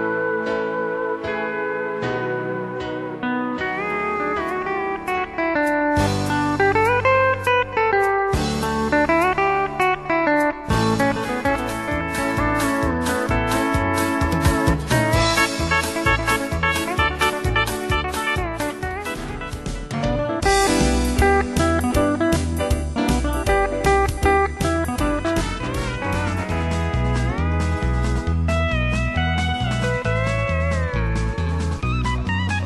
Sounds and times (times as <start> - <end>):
Guitar: 0.0 - 32.6.